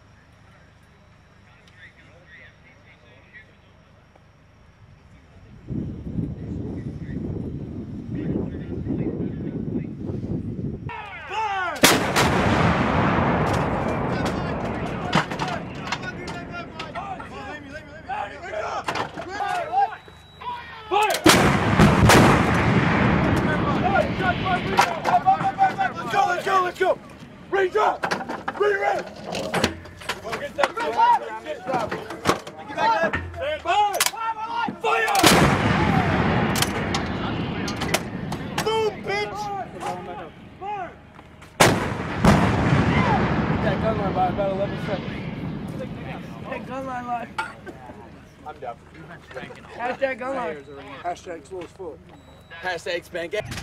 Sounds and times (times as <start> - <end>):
Speech: 1.4 - 4.1, 14.1 - 21.2, 23.4 - 28.0, 30.2 - 35.2, 43.0 - 53.6.